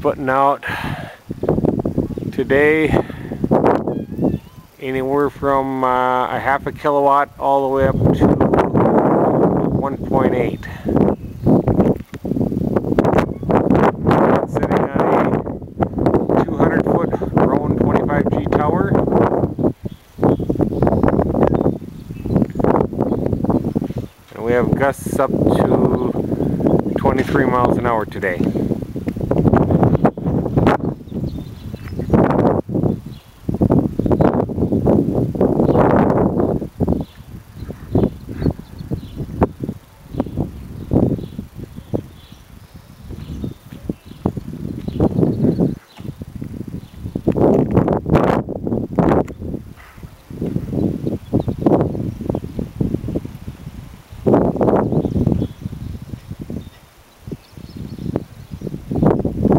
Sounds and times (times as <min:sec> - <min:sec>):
Wind noise (microphone): 0:00.0 - 0:59.5.